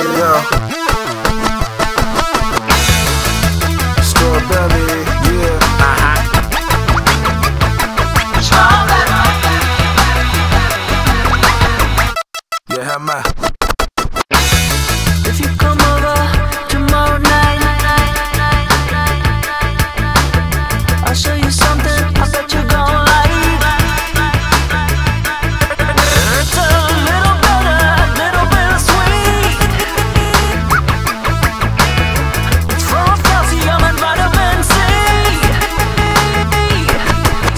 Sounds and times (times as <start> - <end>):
Music: 0.0 - 37.5.